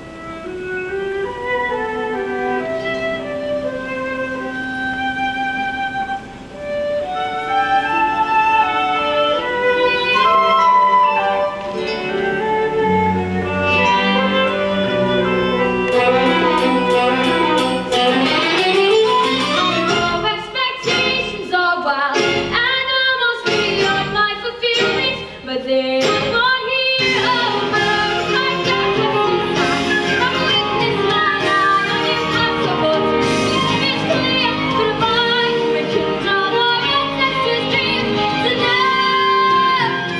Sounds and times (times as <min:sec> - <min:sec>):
String section: 0:00.0 - 0:40.2.